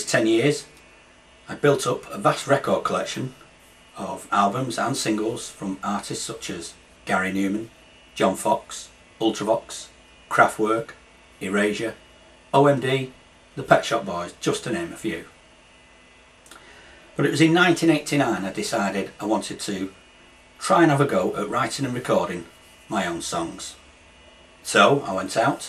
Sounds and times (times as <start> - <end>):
Speech: 0.0 - 0.8, 1.5 - 15.4, 17.2 - 20.0, 20.6 - 23.8, 24.6 - 25.6.